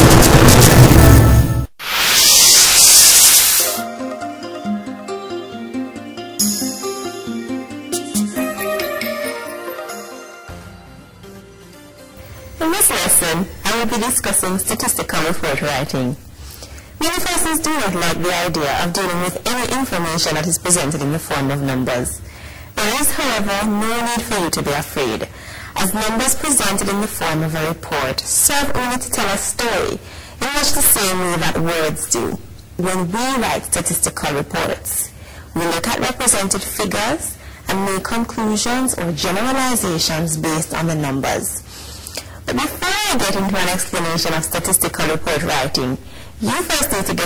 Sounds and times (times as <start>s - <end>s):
Music: 0.3s - 1.8s, 3.6s - 14.6s
Speech: 12.6s - 16.2s, 17.0s - 22.2s, 22.8s - 41.7s, 42.5s - 47.2s.